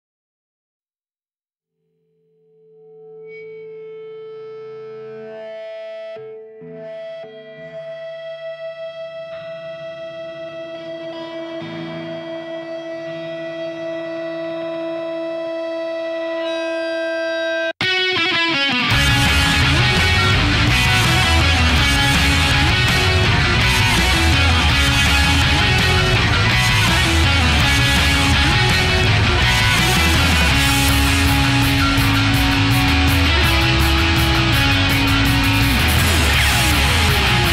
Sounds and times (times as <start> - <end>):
Blues: 3.9 - 37.5.